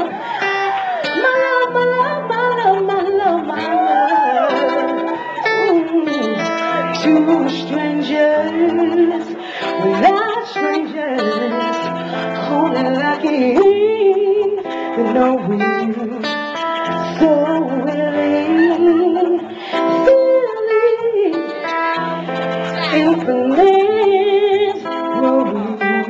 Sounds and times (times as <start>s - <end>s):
Music: 0.0s - 26.0s.